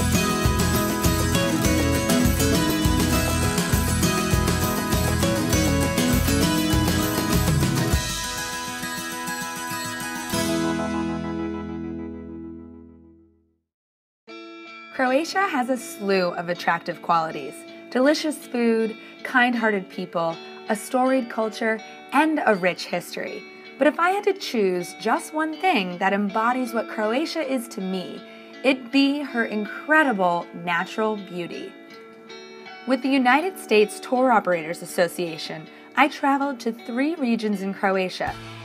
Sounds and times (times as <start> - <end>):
Music: 0.0 - 13.7, 14.3 - 38.6
Speech: 15.0 - 31.8, 32.9 - 38.3.